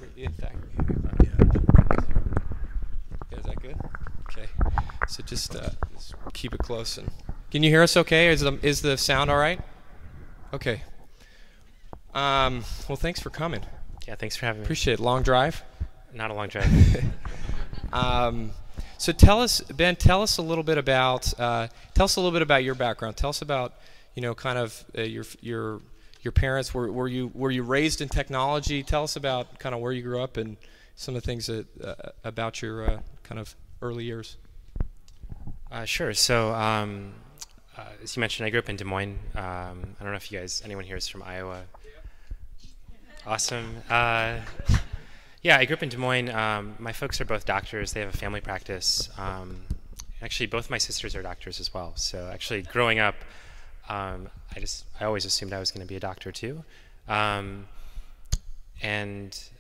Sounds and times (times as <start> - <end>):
Speech: 0.0 - 1.5, 3.3 - 9.6, 10.5 - 10.9, 12.2 - 16.7, 18.0 - 34.4, 35.7 - 41.7, 43.0 - 53.2, 53.9 - 57.7, 58.8 - 59.6.